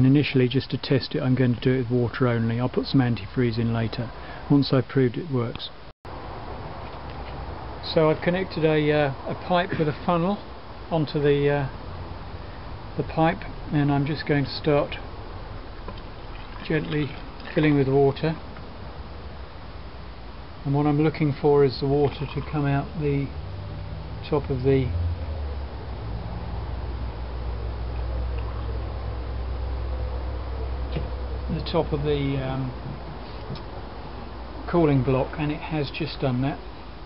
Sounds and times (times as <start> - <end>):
Speech: 0.0 - 5.8, 7.8 - 11.8, 13.0 - 15.0, 16.6 - 18.4, 20.6 - 23.3, 24.2 - 25.0, 31.5 - 32.8, 34.7 - 36.6
Outside, rural or natural: 0.0 - 37.0.